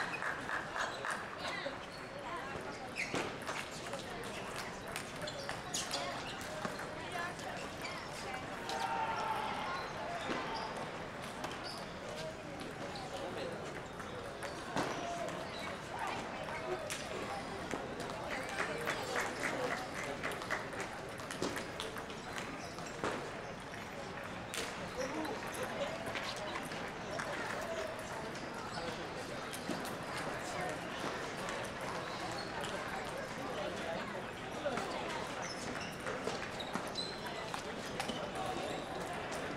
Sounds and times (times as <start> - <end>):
Speech: 0.0 - 39.5.